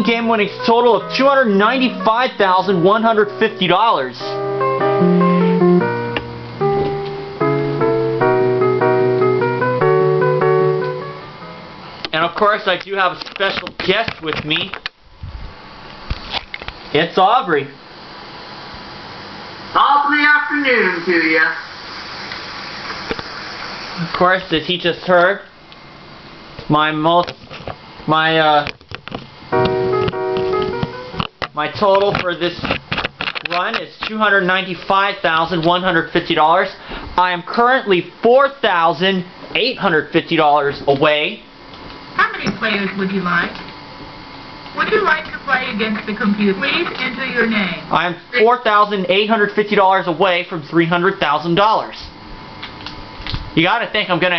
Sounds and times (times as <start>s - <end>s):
Speech: 0.0s - 4.4s, 12.1s - 14.8s, 16.9s - 17.8s, 19.8s - 21.6s, 24.0s - 25.5s, 26.7s - 27.4s, 28.1s - 28.8s, 31.5s - 32.7s, 33.5s - 41.5s, 42.2s - 43.6s, 44.8s - 52.2s, 53.6s - 54.3s
Music: 0.0s - 12.0s, 29.5s - 31.4s.